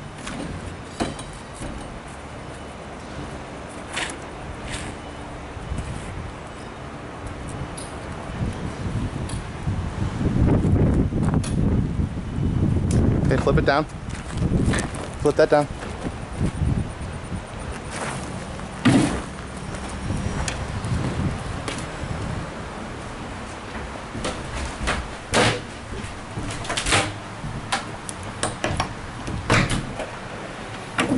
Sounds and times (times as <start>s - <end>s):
Sliding door: 23.4s - 28.0s.